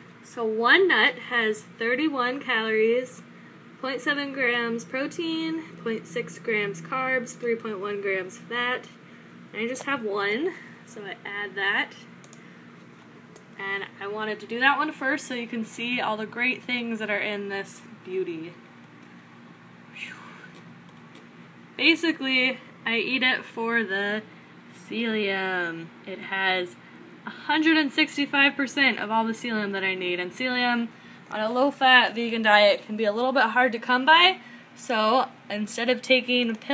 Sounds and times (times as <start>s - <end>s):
Speech: 0.3s - 9.0s, 9.6s - 12.1s, 13.6s - 18.6s, 21.8s - 36.7s.